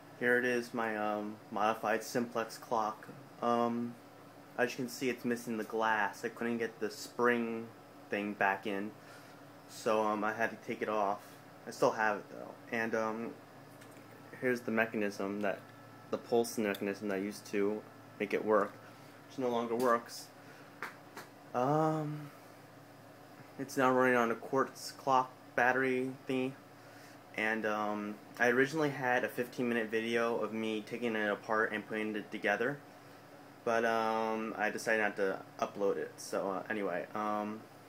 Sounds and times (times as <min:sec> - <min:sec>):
Speech: 0:00.2 - 0:04.0, 0:04.6 - 0:09.0, 0:09.7 - 0:13.4, 0:14.4 - 0:20.3, 0:21.6 - 0:22.4, 0:23.6 - 0:26.6, 0:27.4 - 0:32.8, 0:33.6 - 0:37.6.